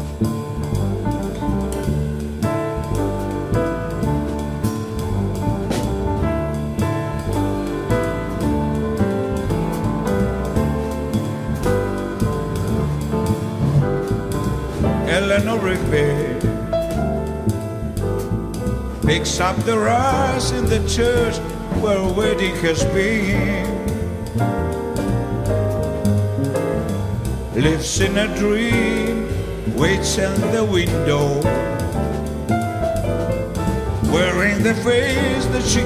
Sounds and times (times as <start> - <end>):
Music: 0.0 - 35.8.